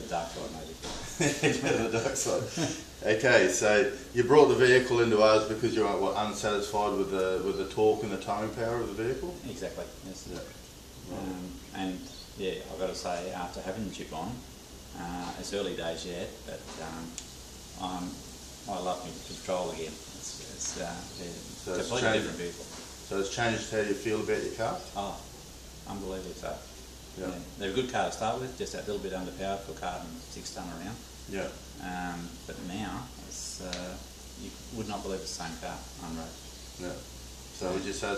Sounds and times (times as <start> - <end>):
Speech: 0.0 - 17.2, 17.8 - 25.3, 25.9 - 38.1.